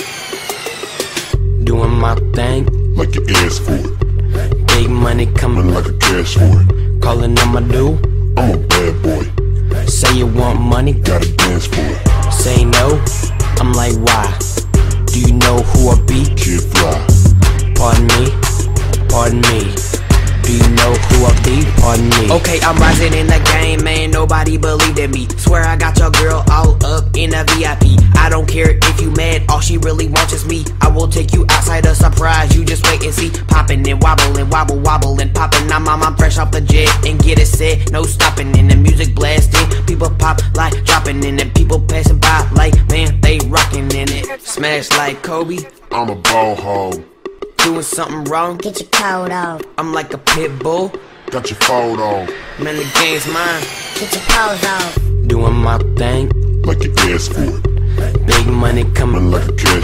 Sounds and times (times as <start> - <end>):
Pop music: 0.0 - 59.8.